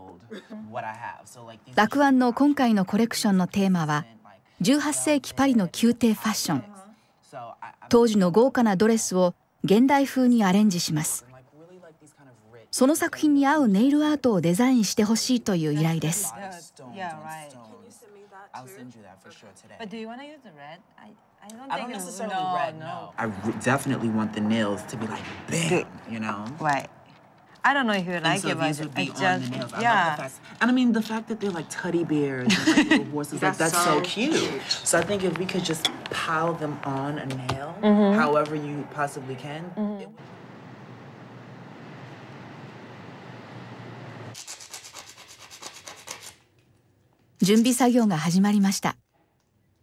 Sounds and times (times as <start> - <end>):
Filing (rasp): 44.4 - 46.4
Rub: 44.4 - 46.4.